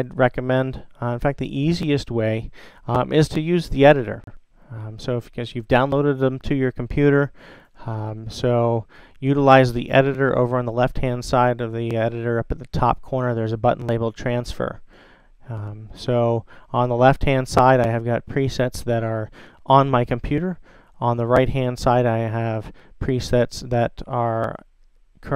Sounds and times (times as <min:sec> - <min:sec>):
Speech: 0:00.0 - 0:14.8, 0:15.5 - 0:25.3.